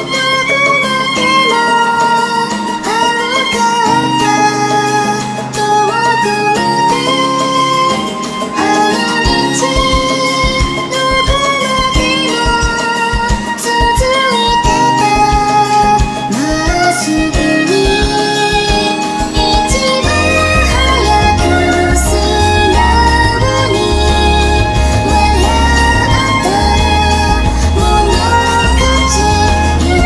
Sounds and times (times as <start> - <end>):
Violin, fiddle: 0.0 - 30.0.